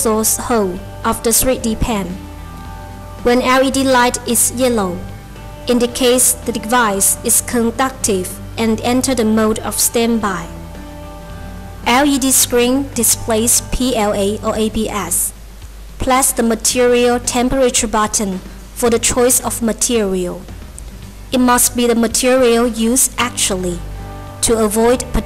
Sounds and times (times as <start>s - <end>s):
Speech: 0.0s - 2.2s, 3.2s - 5.0s, 5.7s - 10.5s, 11.9s - 15.3s, 16.0s - 20.4s, 21.4s - 23.8s, 24.4s - 25.2s
Music: 0.0s - 25.2s.